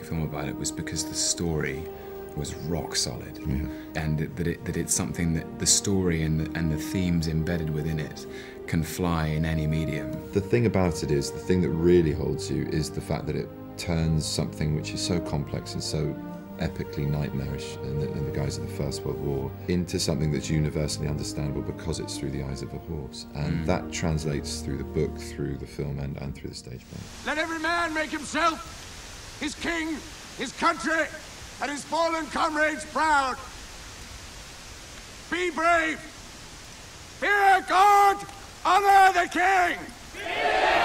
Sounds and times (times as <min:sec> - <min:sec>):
Music: 0:00.0 - 0:28.2
Speech: 0:00.0 - 0:28.7, 0:29.4 - 0:33.5, 0:35.3 - 0:36.1, 0:37.2 - 0:39.9.